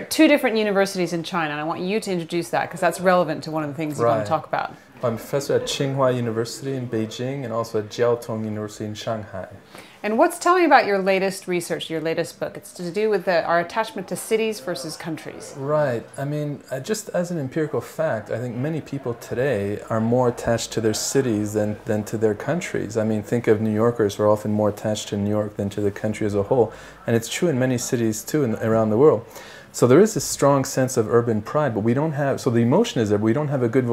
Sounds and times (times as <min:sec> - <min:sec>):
Speech: 0:03.1 - 0:12.2, 0:12.9 - 0:33.9.